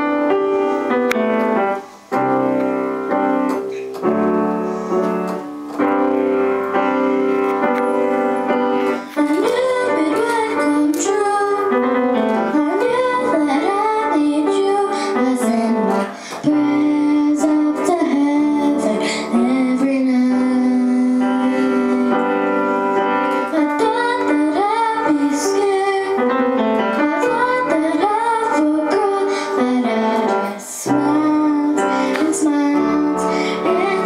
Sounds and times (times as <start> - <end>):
Musical instrument: 0.0 - 34.0.